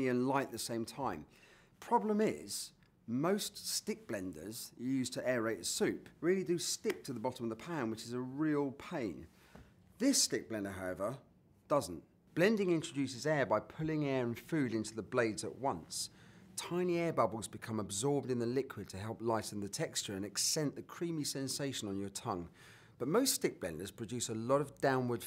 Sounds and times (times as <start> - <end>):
Speech: 0.0 - 9.3, 10.0 - 25.2.